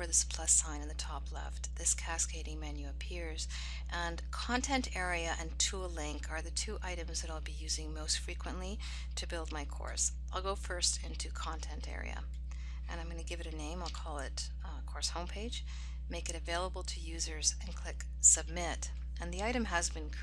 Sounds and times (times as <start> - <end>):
Speech: 0.0 - 12.3, 12.9 - 20.2.